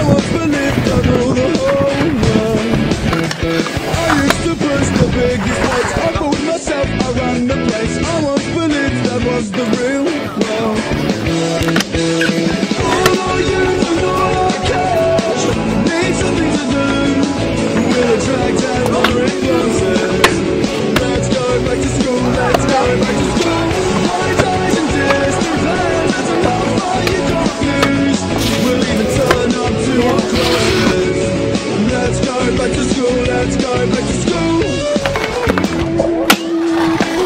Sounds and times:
Skateboard: 0.1 - 6.6, 9.6 - 15.6, 17.8 - 31.2, 34.8 - 37.2.

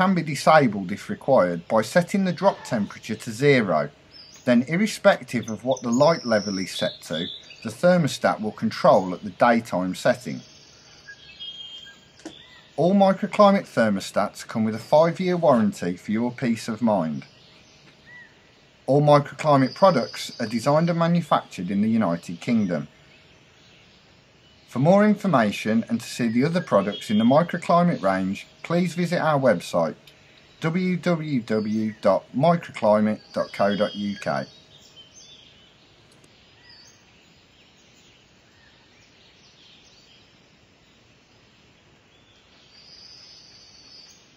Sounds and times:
Speech: 0.0 - 10.5, 12.8 - 17.3, 18.9 - 22.9, 24.7 - 30.0, 30.6 - 34.5
Environmental noise: 0.0 - 44.3.

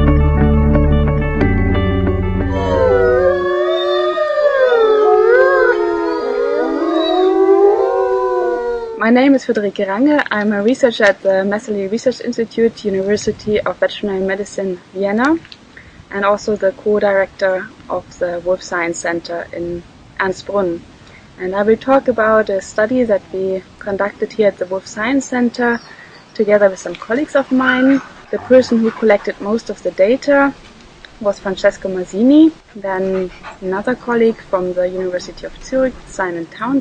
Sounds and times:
Speech: 2.5 - 4.2, 9.0 - 15.5, 16.1 - 20.8, 21.4 - 30.6, 31.2 - 36.8.

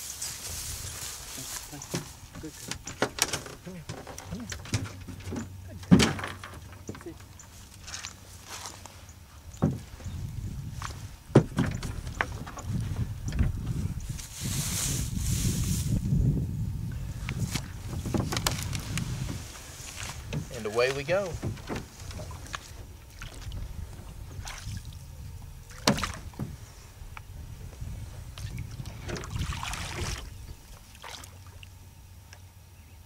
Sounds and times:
Outside, rural or natural: 0.0 - 33.0
Speech: 20.5 - 21.4.

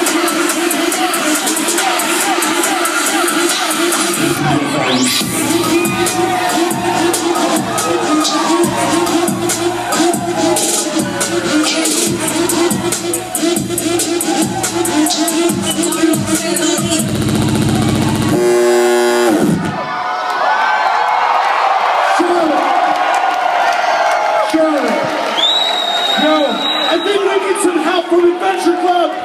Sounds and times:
Speech: 26.2 - 29.2.

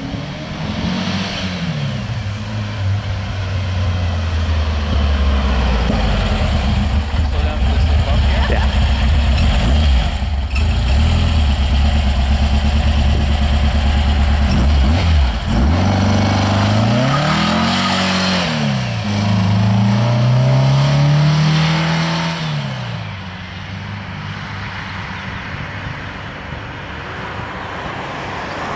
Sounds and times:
Accelerating, revving, vroom: 0.0 - 2.1, 9.4 - 11.6, 14.5 - 23.0
Car: 0.0 - 28.7.

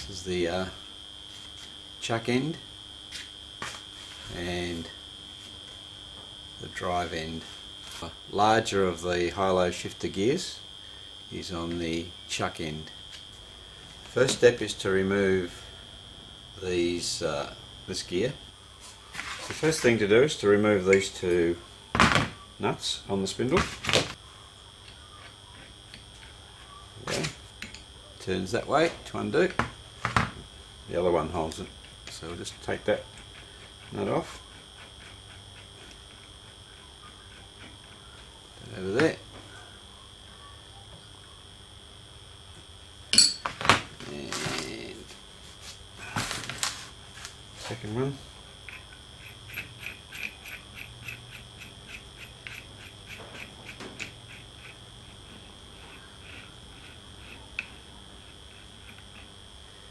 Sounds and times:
Speech: 0.0 - 0.8, 4.3 - 4.9, 6.6 - 10.6, 11.3 - 12.9, 14.2 - 15.6, 16.6 - 18.4, 19.6 - 21.6, 22.6 - 23.7, 28.2 - 29.6, 30.9 - 33.1, 33.9 - 34.4, 38.6 - 39.2, 44.0 - 45.1, 47.6 - 48.2.

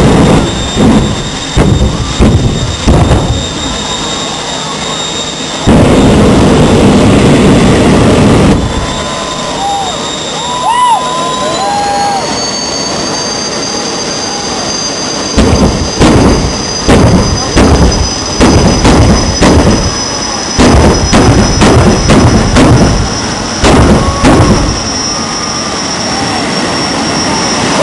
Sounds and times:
Motor vehicle (road): 0.0 - 27.8.

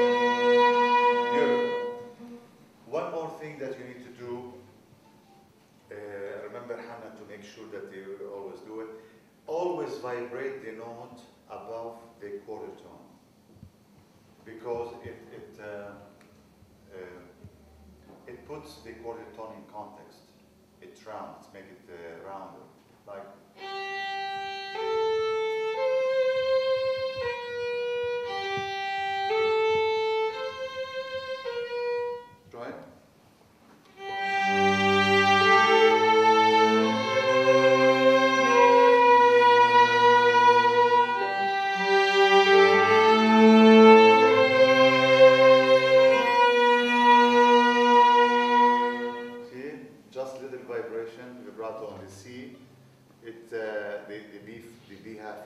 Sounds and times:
Speech: 2.9 - 4.7, 5.9 - 13.2, 14.5 - 16.2, 16.9 - 23.4, 32.5 - 33.0, 49.4 - 52.6, 53.2 - 55.4.

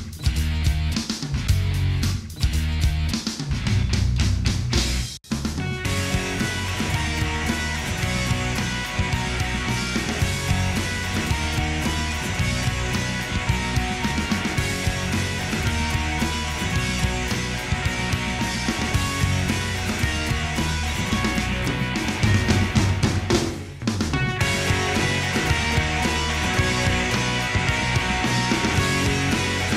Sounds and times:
Music: 0.0 - 29.7.

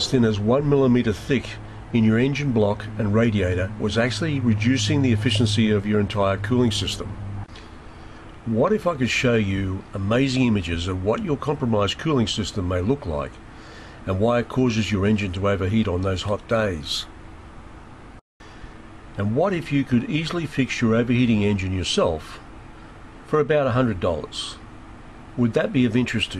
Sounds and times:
Speech: 0.0 - 7.2, 8.4 - 13.4, 14.0 - 17.1, 19.2 - 22.4, 23.3 - 24.6, 25.4 - 26.3.

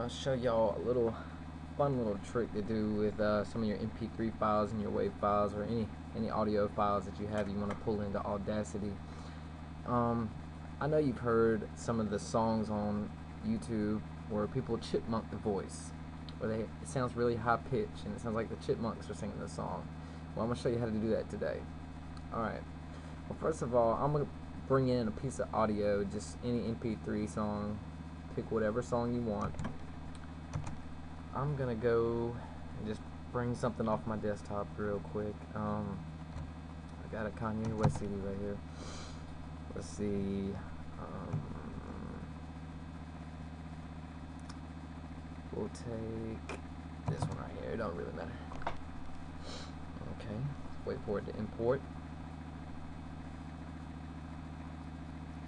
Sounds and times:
Speech: 0.0 - 9.0, 9.9 - 21.7, 22.3 - 22.7, 23.3 - 29.6, 31.3 - 36.1, 37.0 - 38.6, 39.7 - 42.3, 45.5 - 48.5, 50.0 - 51.8.

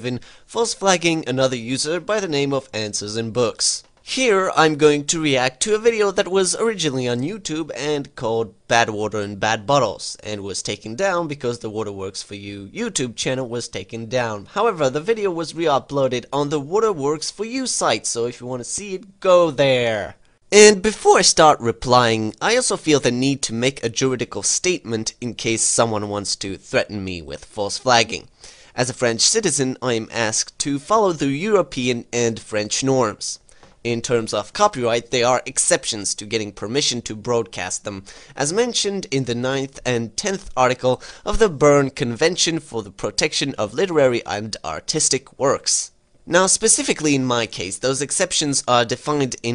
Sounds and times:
Speech: 0.0 - 49.5.

